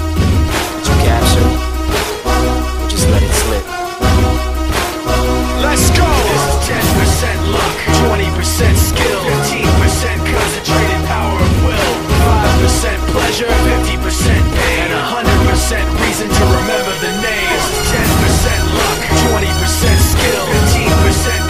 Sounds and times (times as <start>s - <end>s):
Music: 0.0s - 21.5s
Speech: 0.8s - 1.6s, 2.9s - 3.7s, 5.6s - 9.6s.